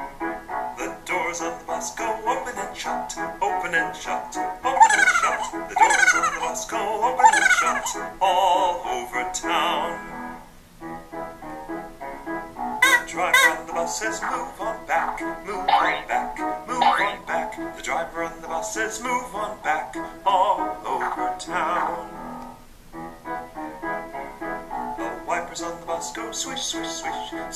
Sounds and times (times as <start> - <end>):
Music: 0.0 - 27.5.